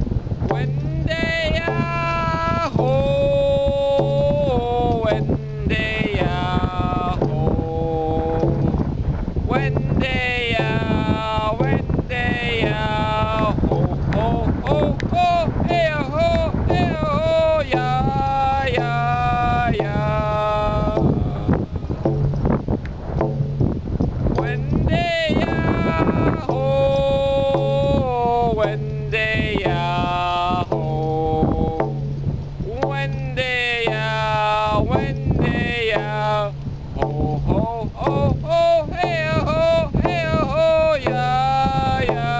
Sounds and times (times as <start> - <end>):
Male singing: 0.4 - 8.8, 9.5 - 22.1, 24.4 - 42.3
Music: 0.4 - 9.0, 9.6 - 42.3.